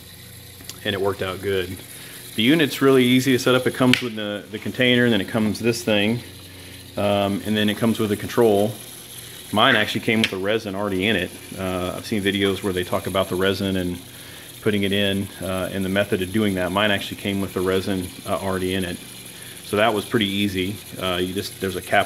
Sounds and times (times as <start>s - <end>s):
Water: 0.0s - 22.0s
Speech: 0.7s - 1.8s, 2.4s - 6.3s, 7.0s - 8.8s, 9.5s - 19.0s, 19.7s - 22.0s.